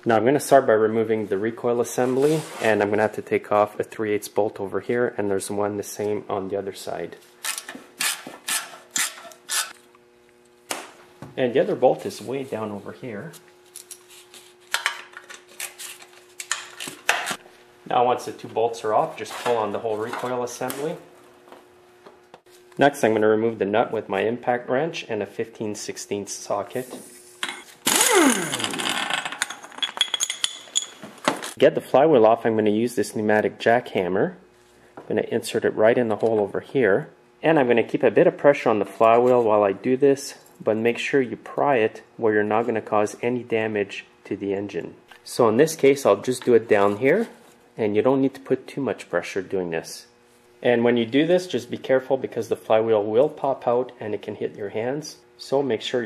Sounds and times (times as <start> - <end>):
Speech: 0.0 - 7.2, 11.3 - 13.4, 17.9 - 21.1, 22.8 - 27.0, 31.6 - 34.4, 35.0 - 56.0.